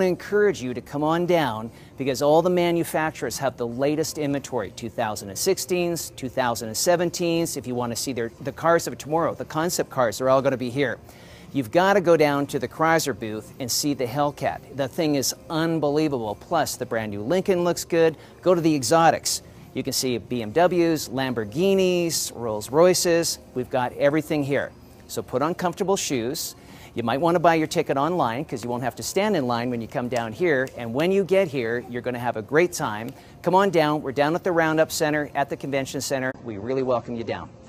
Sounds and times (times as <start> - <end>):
Speech: 0.0 - 37.6.